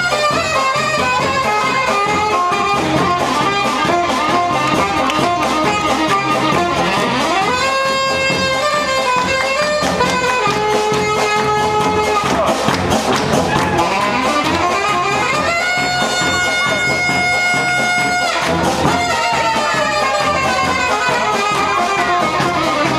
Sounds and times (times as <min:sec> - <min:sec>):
Music: 0:00.0 - 0:22.9.